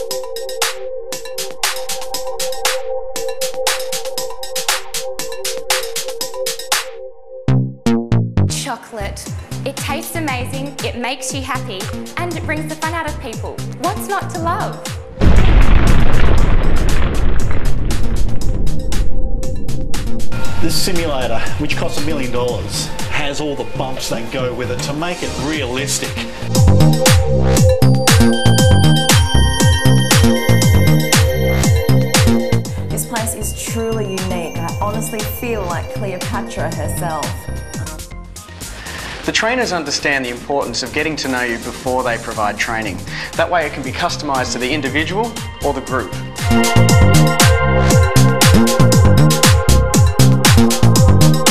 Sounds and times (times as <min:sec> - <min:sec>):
Speech: 0:08.6 - 0:14.8, 0:20.6 - 0:26.3, 0:33.0 - 0:37.4, 0:39.3 - 0:46.1
Electronica: 0:09.2 - 0:38.8, 0:44.3 - 0:51.5.